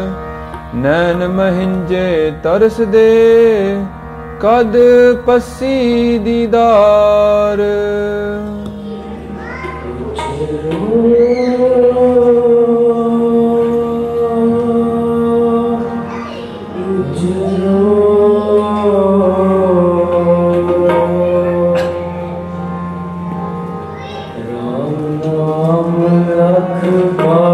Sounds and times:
Mantra: 0:00.8 - 0:22.0, 0:24.4 - 0:27.5.

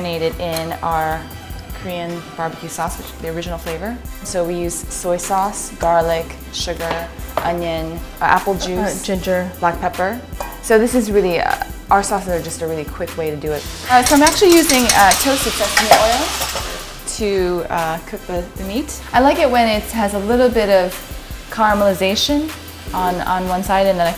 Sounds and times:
Frying (food): 0:11.4 - 0:24.1
Sizzle: 0:13.4 - 0:24.1.

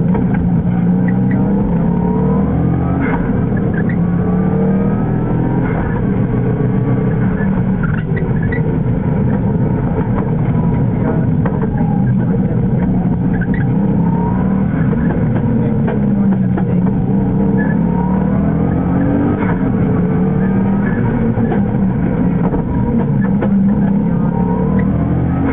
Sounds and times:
Car: 0:00.0 - 0:25.5.

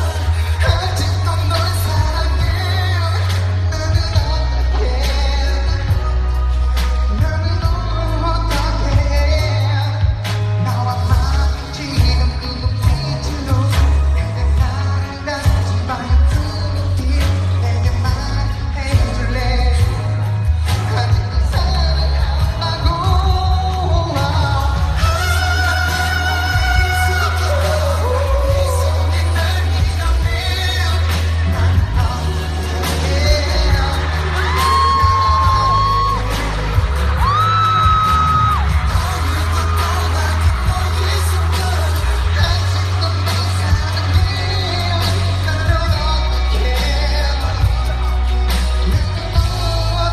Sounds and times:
Male singing: 0:00.0 - 0:50.1
Music: 0:00.0 - 0:50.1.

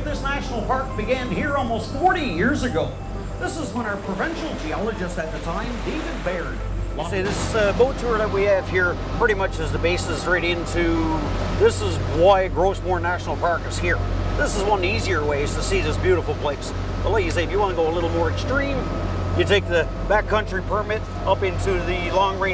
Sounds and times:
Motorboat, speedboat: 0:00.0 - 0:22.5
Speech: 0:00.0 - 0:22.5.

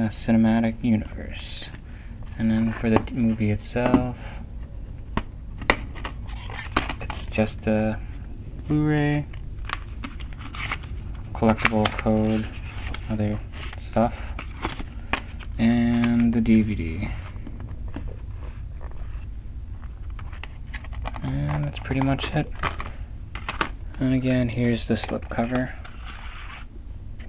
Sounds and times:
Speech: 0:00.0 - 0:01.8, 0:02.4 - 0:04.4, 0:07.0 - 0:08.0, 0:08.7 - 0:09.3, 0:11.4 - 0:12.5, 0:13.1 - 0:14.2, 0:15.6 - 0:17.2, 0:21.2 - 0:22.5, 0:24.0 - 0:25.8.

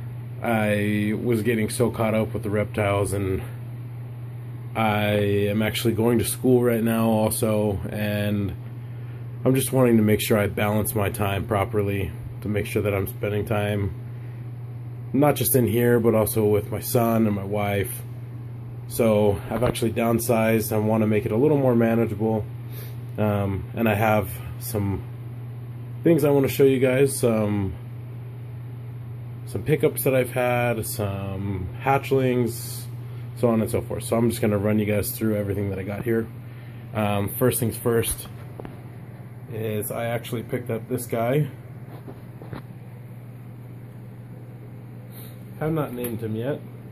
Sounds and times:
Inside, small room: 0:00.0 - 0:46.9
Speech: 0:00.4 - 0:03.6, 0:04.8 - 0:08.6, 0:09.4 - 0:14.0, 0:15.1 - 0:18.1, 0:18.9 - 0:22.5, 0:23.2 - 0:25.1, 0:26.0 - 0:27.8, 0:29.4 - 0:38.4, 0:39.5 - 0:41.6, 0:45.6 - 0:46.7.

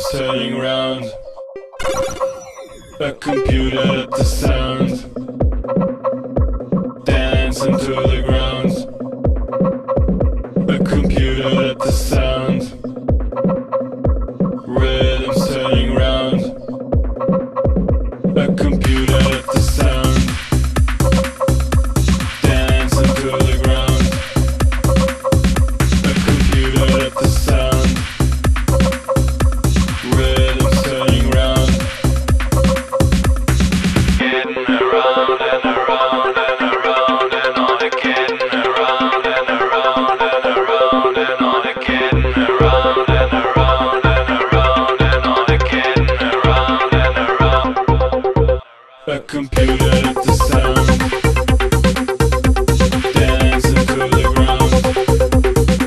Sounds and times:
Music: 0:00.0 - 0:55.8.

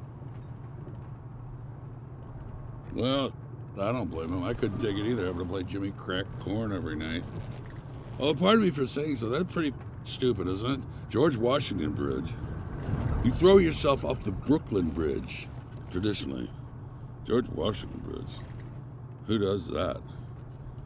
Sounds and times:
Speech: 0:02.9 - 0:07.3, 0:08.2 - 0:12.4, 0:13.2 - 0:16.5, 0:17.3 - 0:18.4, 0:19.2 - 0:20.1.

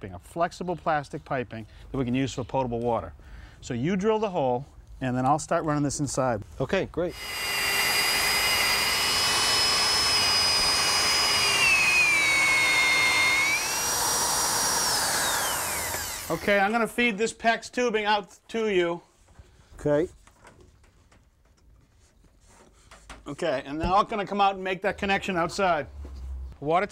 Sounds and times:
Speech: 0:00.0 - 0:07.2, 0:16.3 - 0:19.0, 0:19.8 - 0:20.2, 0:23.3 - 0:25.9, 0:26.6 - 0:26.9.

